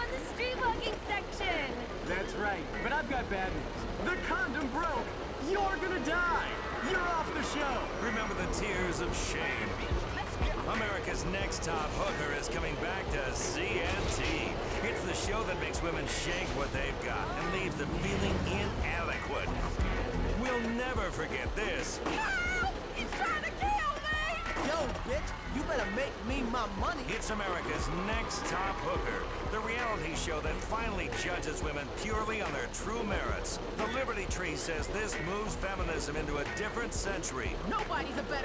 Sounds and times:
Speech: 0:00.0 - 0:19.6, 0:20.3 - 0:38.4.

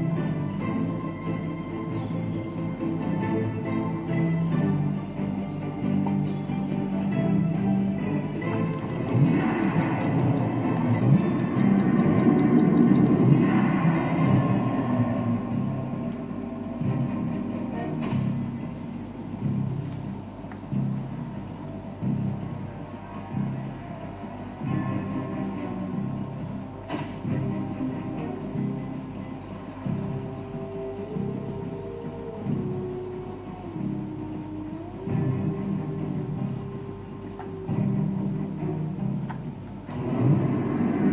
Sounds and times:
Video game music: 0:00.0 - 0:41.1.

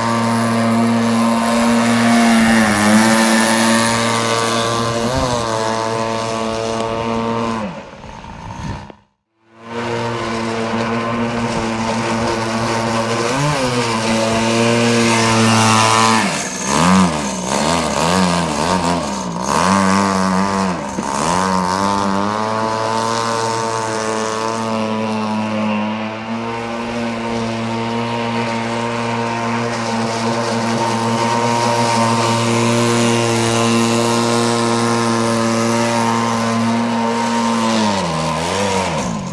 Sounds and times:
Motorboat, speedboat: 0:00.0 - 0:39.3.

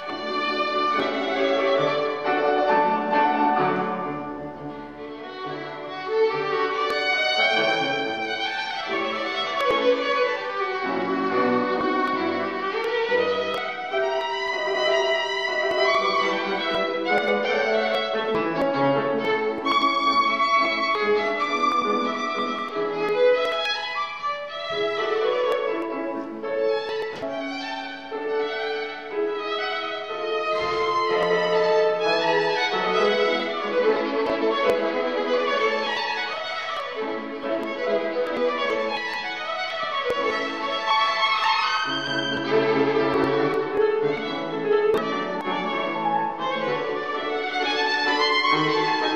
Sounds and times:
Violin, fiddle: 0:00.0 - 0:49.1.

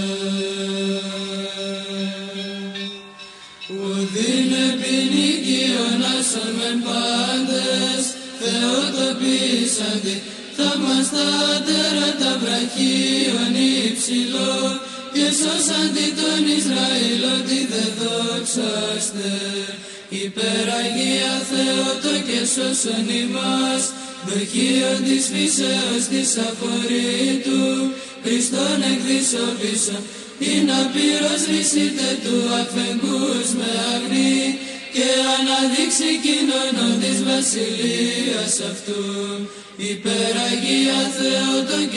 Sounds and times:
Mantra: 0:00.0 - 0:41.9.

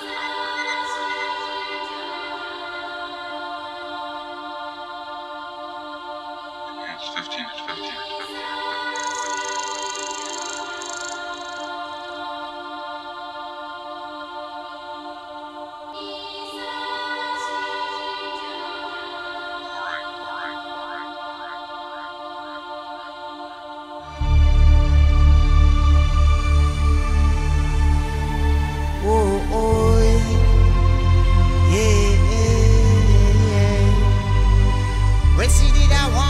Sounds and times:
Music: 0:00.0 - 0:36.2
Speech: 0:06.8 - 0:08.4, 0:35.3 - 0:36.2.

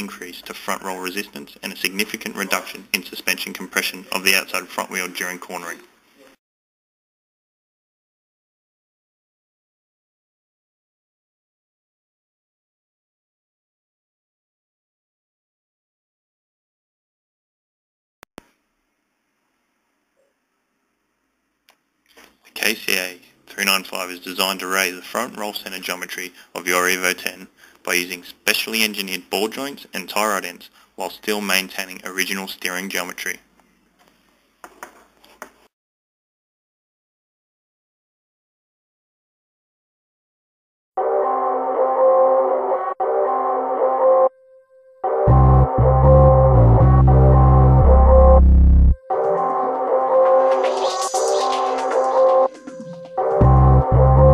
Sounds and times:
Music: 0:41.0 - 0:54.3.

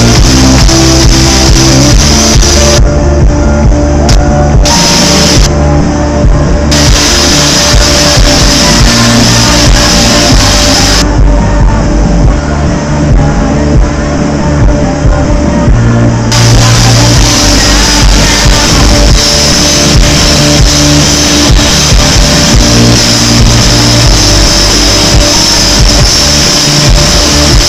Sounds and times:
Music: 0:00.0 - 0:27.6.

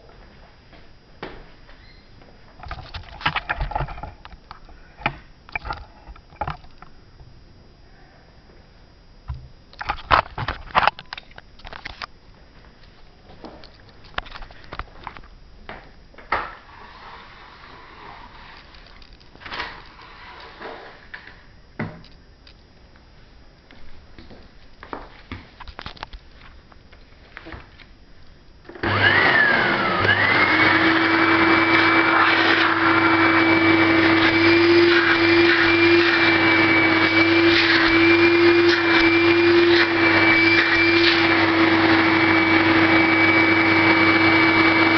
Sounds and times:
Vacuum cleaner: 0:16.3 - 0:21.4, 0:28.7 - 0:44.9.

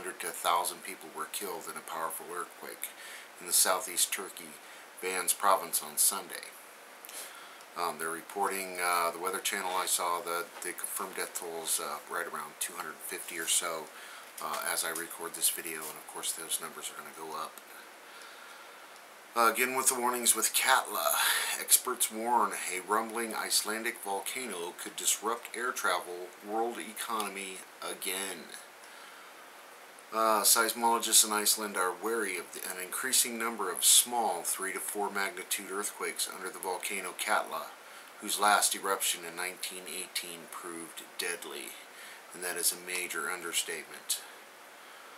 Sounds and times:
Speech: 0:00.0 - 0:06.6, 0:07.2 - 0:17.8, 0:19.3 - 0:28.7, 0:30.1 - 0:44.4.

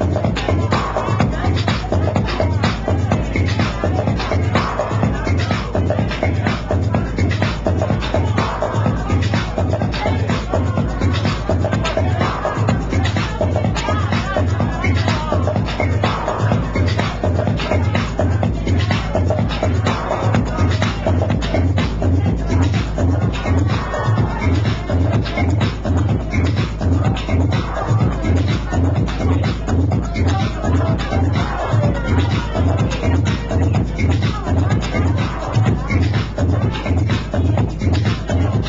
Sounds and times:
Techno: 0:00.0 - 0:38.6.

